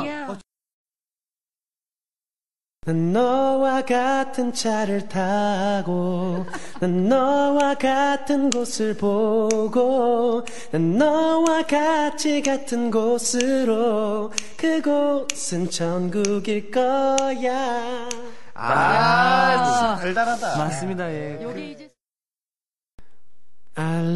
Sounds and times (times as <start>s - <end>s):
Male singing: 2.8s - 18.3s, 23.8s - 24.1s.